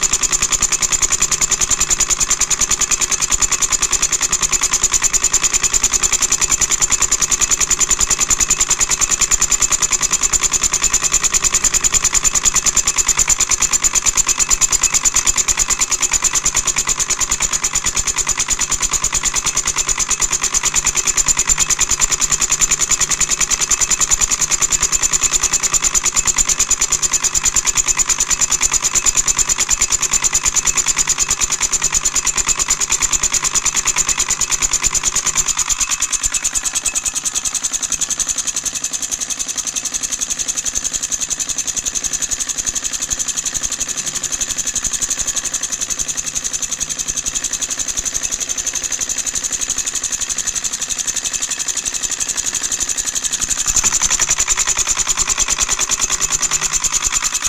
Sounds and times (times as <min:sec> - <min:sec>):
Engine: 0:00.0 - 0:57.4.